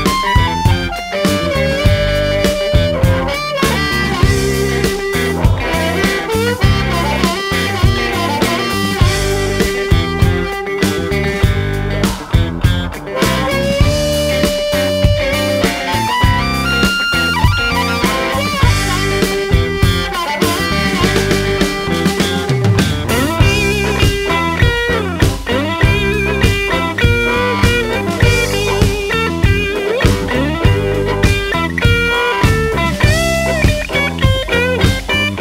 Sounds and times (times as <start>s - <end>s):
Blues: 0.0s - 35.4s
Psychedelic rock: 0.0s - 35.4s.